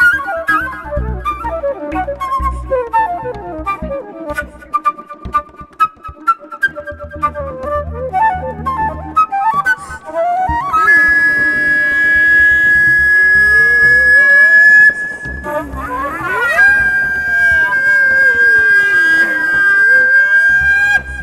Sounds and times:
Flute: 0.0 - 21.2.

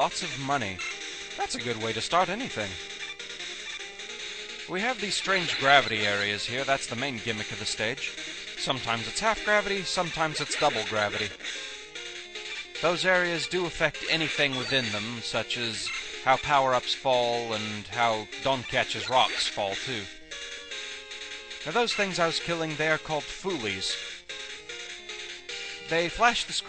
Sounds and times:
Speech: 0.0 - 0.8, 1.4 - 2.8, 4.7 - 11.4, 12.8 - 20.1, 21.7 - 24.0, 25.9 - 26.6
Music: 0.0 - 26.6.

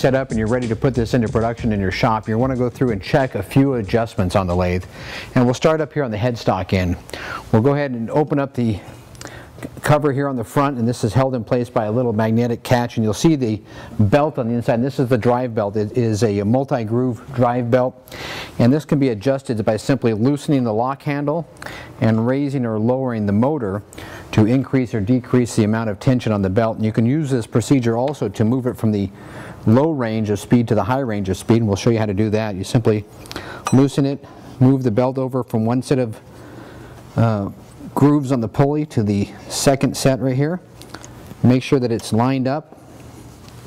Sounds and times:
Speech: 0.0 - 8.9, 9.8 - 18.0, 18.6 - 33.1, 33.7 - 36.2, 37.2 - 40.7, 41.4 - 42.7.

